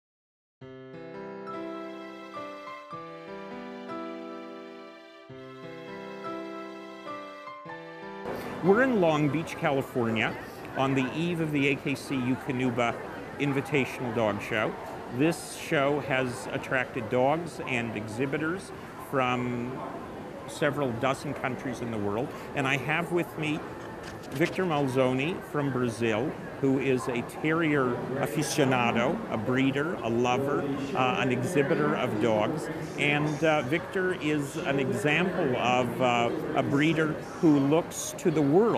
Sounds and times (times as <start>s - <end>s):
Background music: 0.6s - 9.5s
Speech: 8.6s - 23.6s, 24.3s - 38.7s.